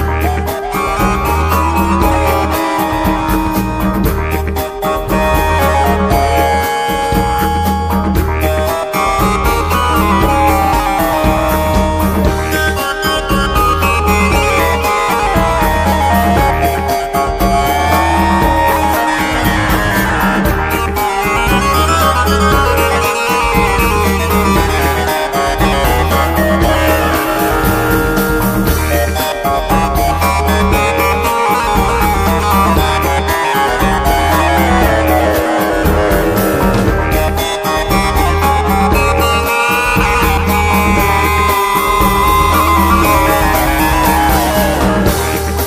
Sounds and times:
Drum: 0.0 - 45.6.

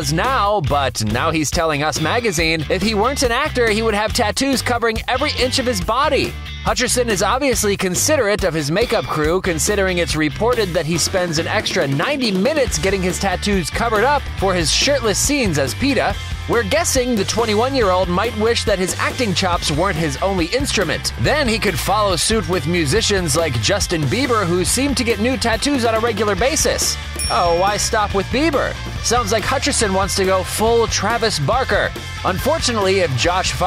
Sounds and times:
Music: 0.0 - 33.6
Speech: 0.0 - 33.6.

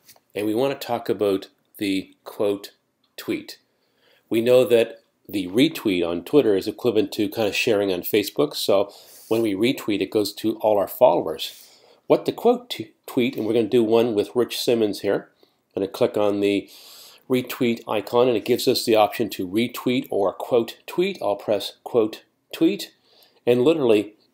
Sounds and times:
Speech: 0.3 - 3.6, 4.3 - 16.7, 17.3 - 24.2.

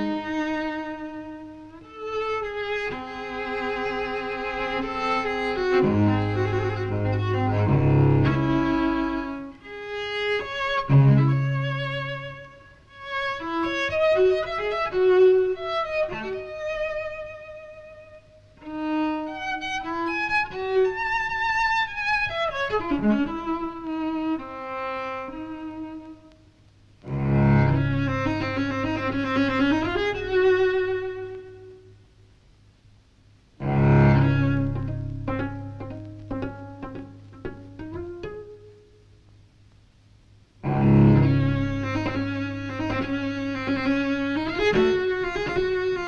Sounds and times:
Cello: 0.0 - 32.0, 33.6 - 39.0, 40.6 - 46.0
Double bass: 2.5 - 12.5, 27.0 - 31.1, 33.6 - 38.8, 40.6 - 46.0.

